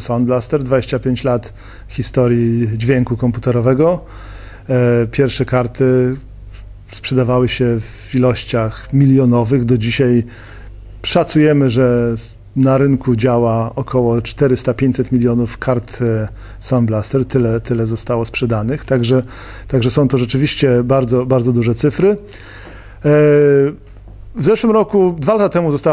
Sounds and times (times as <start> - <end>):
Speech: 0.0 - 4.1, 4.7 - 6.3, 6.9 - 10.3, 11.0 - 22.3, 23.0 - 23.8, 24.4 - 25.9.